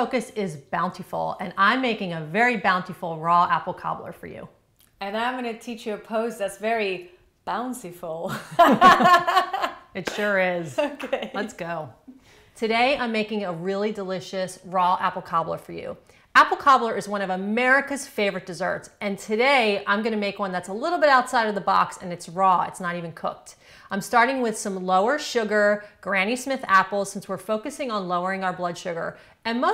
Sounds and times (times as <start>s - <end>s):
Speech: 10.0s - 12.0s.